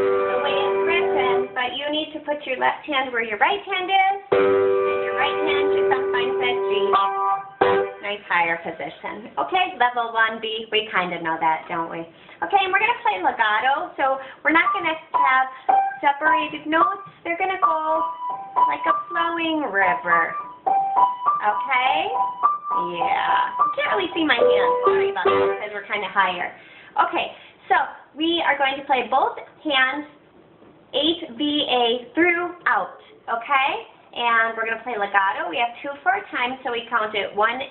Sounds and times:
Music: 0:00.0 - 0:01.6, 0:04.3 - 0:08.1, 0:14.6 - 0:17.0, 0:17.6 - 0:25.7
Speech: 0:00.5 - 0:04.3, 0:05.1 - 0:07.1, 0:08.0 - 0:18.1, 0:18.7 - 0:20.4, 0:21.4 - 0:22.2, 0:22.8 - 0:30.2, 0:30.9 - 0:37.7.

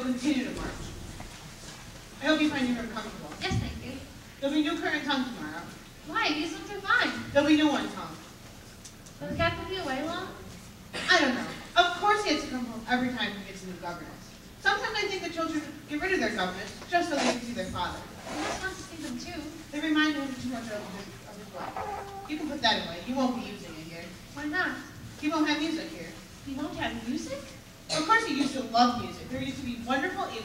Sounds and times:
Speech: 0:02.2 - 0:08.2, 0:09.2 - 0:30.4.

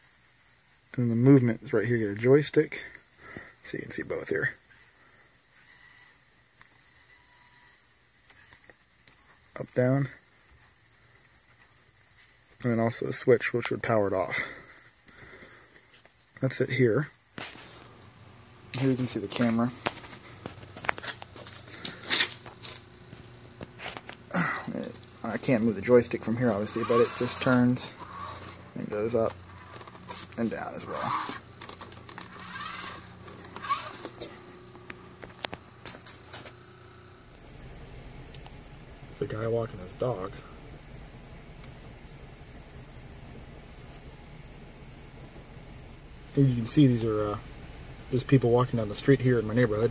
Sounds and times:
Speech: 0:00.9 - 0:03.0, 0:03.6 - 0:04.6, 0:09.6 - 0:10.2, 0:12.6 - 0:14.6, 0:16.4 - 0:17.2, 0:18.8 - 0:19.8, 0:24.6 - 0:28.0, 0:28.8 - 0:29.4, 0:30.4 - 0:31.2, 0:39.2 - 0:40.5, 0:46.4 - 0:47.4, 0:48.1 - 0:49.9.

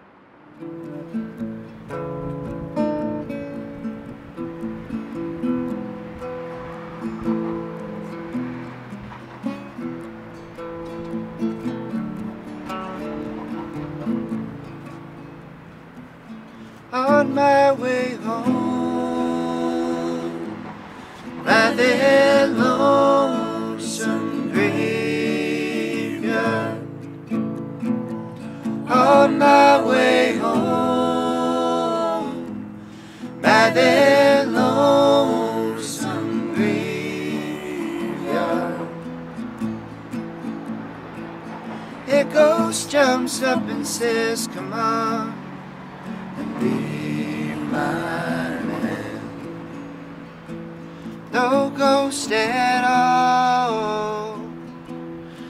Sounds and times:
Music: 0:00.6 - 0:44.6, 0:45.3 - 0:55.5.

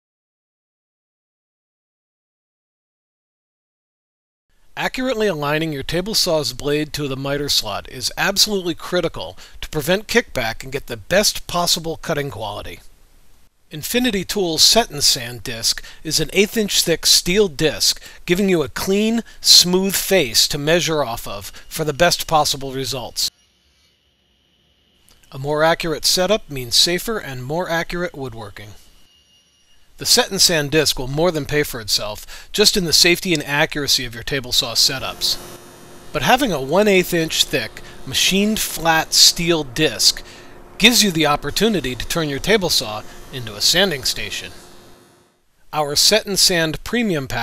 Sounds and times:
Speech: 0:04.8 - 0:12.9, 0:13.7 - 0:23.3, 0:25.3 - 0:28.8, 0:30.0 - 0:35.4, 0:36.2 - 0:40.2, 0:40.8 - 0:44.6, 0:45.7 - 0:47.4.

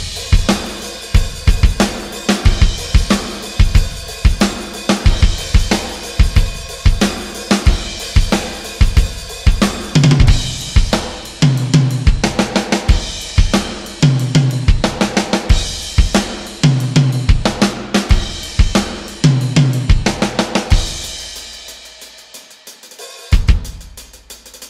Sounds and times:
Bass drum: 0:00.0 - 0:21.3, 0:23.4 - 0:24.0.

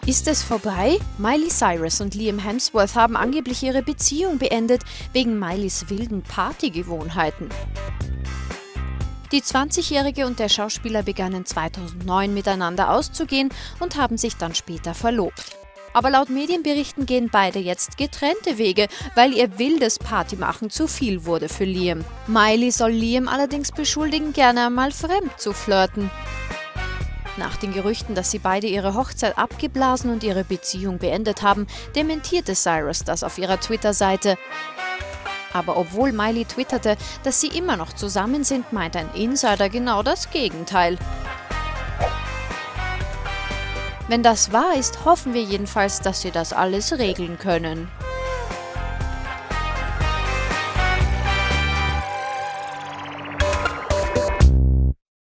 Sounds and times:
Speech: 0:00.0 - 0:07.6, 0:09.3 - 0:26.1, 0:27.4 - 0:34.4, 0:35.6 - 0:41.0, 0:44.1 - 0:47.9
Music: 0:00.0 - 0:55.0.

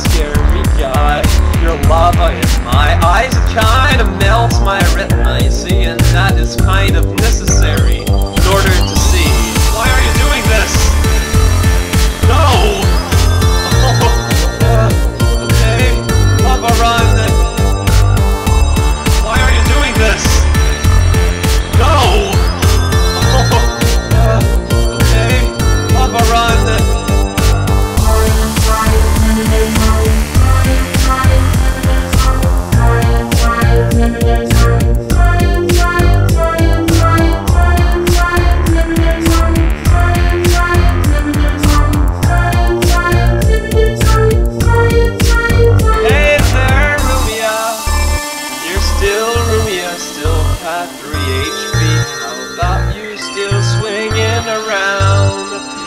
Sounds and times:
Music: 0:00.0 - 0:55.8.

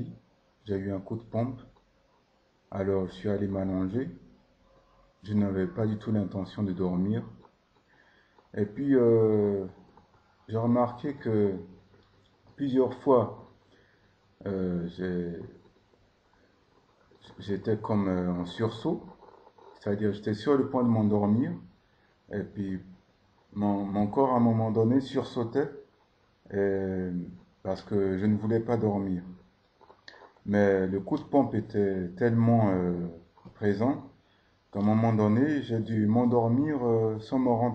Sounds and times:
Speech: 0:00.0 - 0:01.7, 0:02.7 - 0:04.3, 0:04.9 - 0:07.4, 0:08.5 - 0:09.8, 0:10.5 - 0:11.8, 0:12.6 - 0:13.5, 0:14.4 - 0:15.6, 0:17.2 - 0:21.7, 0:22.3 - 0:25.9, 0:26.5 - 0:29.5, 0:30.1 - 0:37.7.

